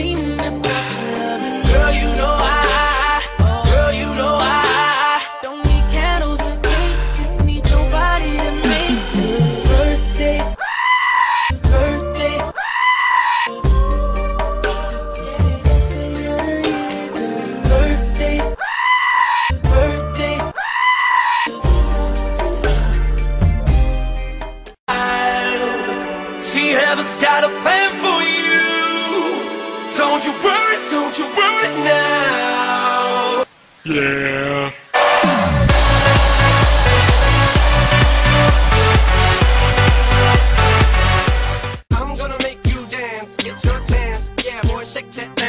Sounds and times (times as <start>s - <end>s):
Electronic dance music: 0.0s - 10.6s, 35.0s - 43.5s.